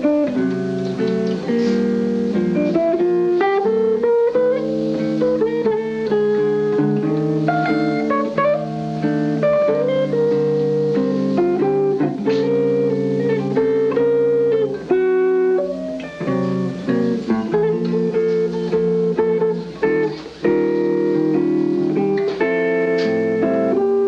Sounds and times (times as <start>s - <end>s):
Electric guitar: 0.0s - 24.0s
Jazz: 0.0s - 24.0s.